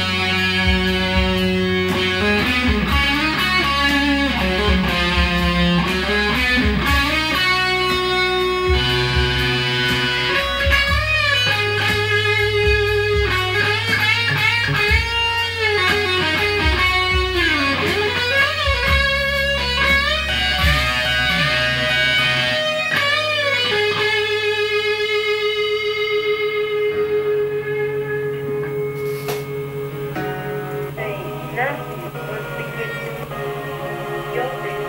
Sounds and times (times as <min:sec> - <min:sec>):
Electric guitar: 0:00.0 - 0:34.8.